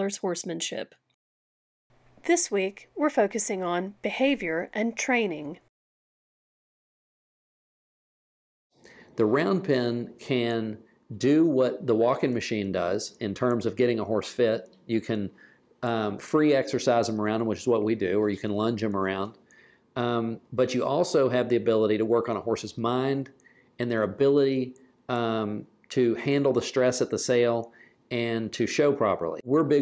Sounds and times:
Speech: 0.0 - 0.9, 2.3 - 5.7, 9.2 - 19.4, 20.0 - 29.8.

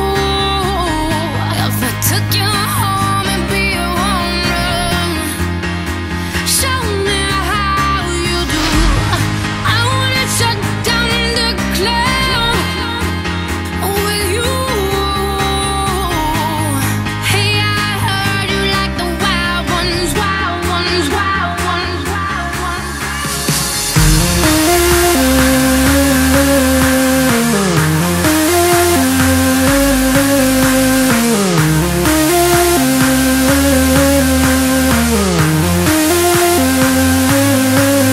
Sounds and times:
Techno: 0.0 - 38.1.

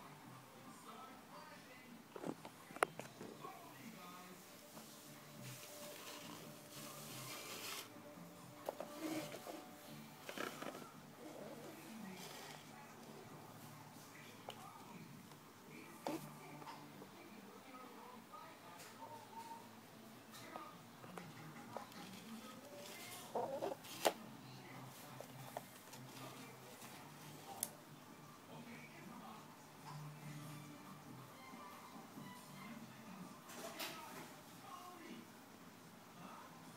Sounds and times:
Inside, small room: 0.0 - 36.7
Speech: 11.3 - 27.7.

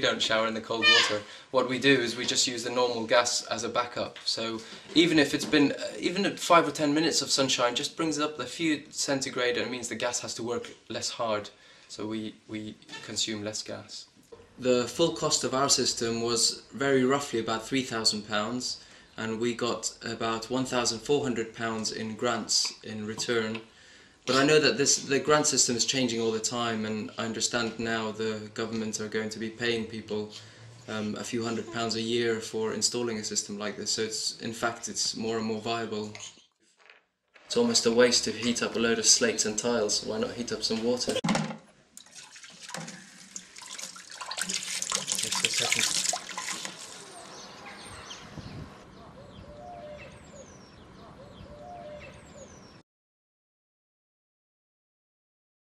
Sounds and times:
Speech: 0.0 - 23.7, 24.3 - 36.3, 37.5 - 41.3, 45.2 - 46.0
Sink (filling or washing): 42.0 - 47.1
Water tap, faucet: 42.0 - 47.1.

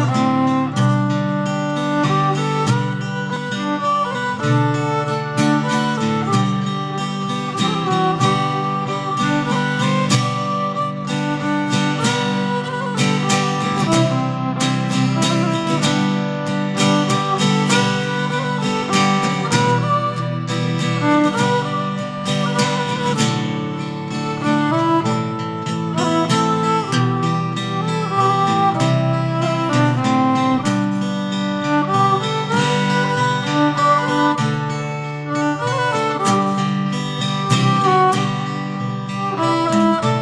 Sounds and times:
Violin, fiddle: 0.0 - 40.2.

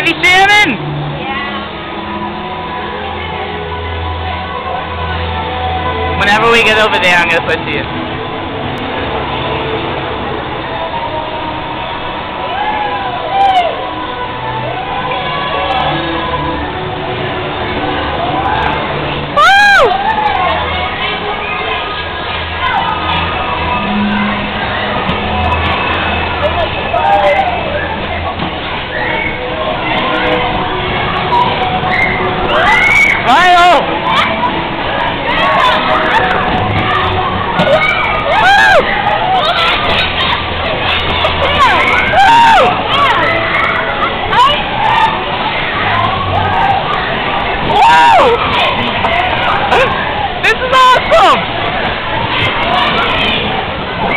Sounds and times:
Music: 0.0 - 54.1.

